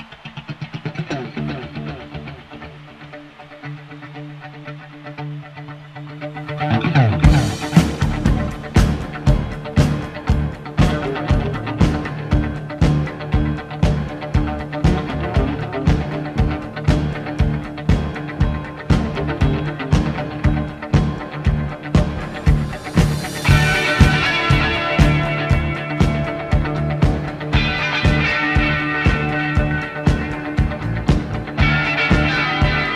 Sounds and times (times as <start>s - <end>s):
Music: 0.0s - 32.9s.